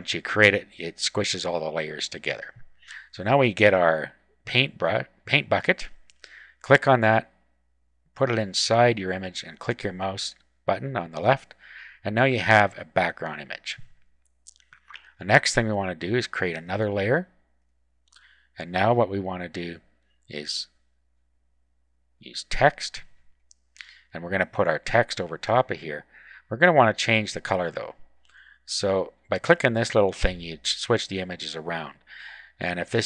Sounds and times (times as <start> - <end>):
Speech: 0.0 - 6.0, 6.6 - 7.4, 8.2 - 13.9, 15.2 - 17.3, 18.6 - 20.8, 22.2 - 23.1, 23.8 - 28.0, 28.6 - 32.0, 32.6 - 33.0.